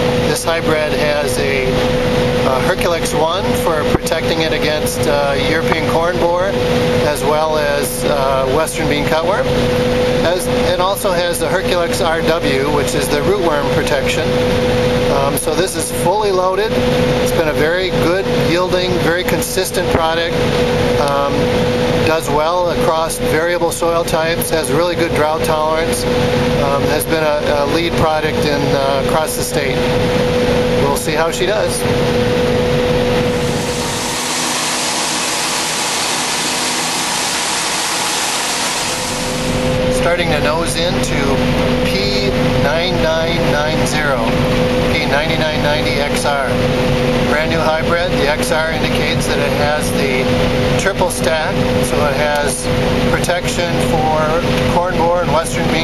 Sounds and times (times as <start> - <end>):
Speech: 0.3 - 1.8, 2.4 - 9.5, 10.2 - 14.4, 15.1 - 20.4, 21.0 - 29.9, 30.8 - 31.9, 39.9 - 46.7, 47.3 - 55.8.